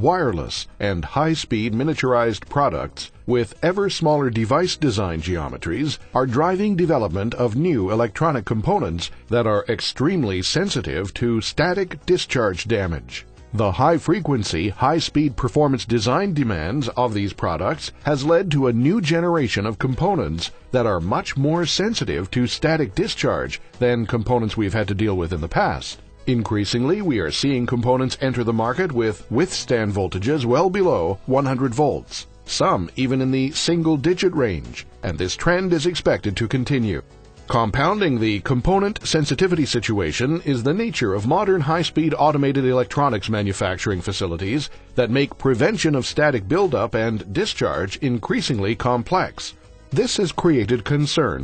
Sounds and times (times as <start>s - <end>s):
Music: 0.0s - 51.4s
Speech: 0.0s - 51.4s.